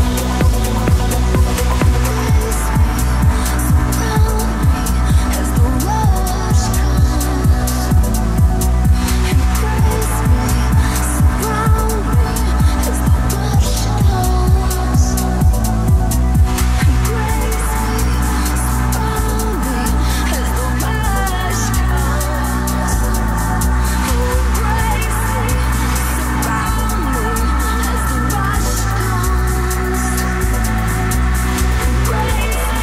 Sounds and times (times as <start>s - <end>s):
Music: 0.0s - 32.8s.